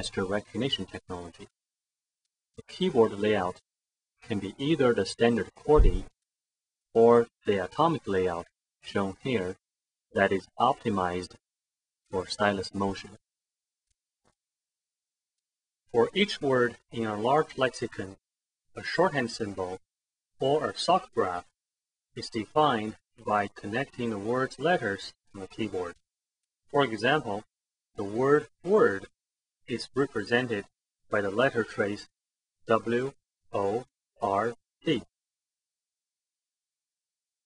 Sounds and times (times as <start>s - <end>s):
Speech: 0.0s - 1.5s, 2.6s - 6.2s, 7.0s - 9.6s, 10.2s - 11.4s, 12.1s - 13.2s, 15.9s - 18.2s, 18.8s - 21.5s, 22.2s - 26.0s, 26.7s - 29.1s, 29.7s - 32.1s, 32.7s - 35.1s.